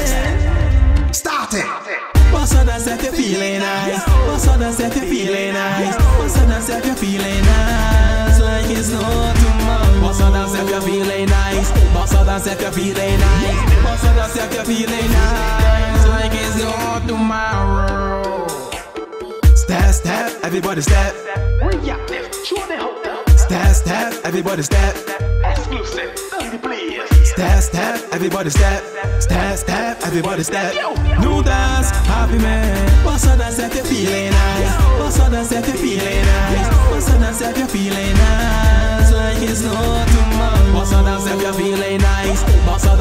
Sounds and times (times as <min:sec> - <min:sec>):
Dance music: 0:00.0 - 0:43.0.